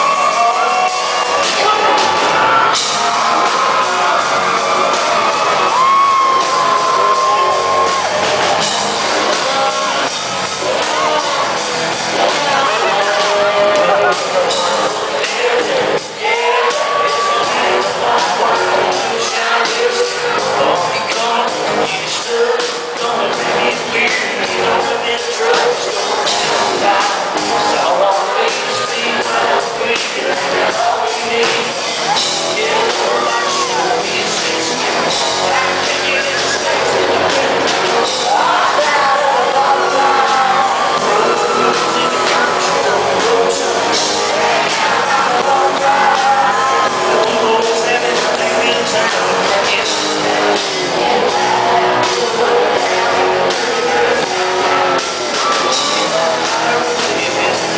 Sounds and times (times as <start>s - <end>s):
Male singing: 0.0s - 2.1s, 2.7s - 57.7s
Music: 0.0s - 57.7s.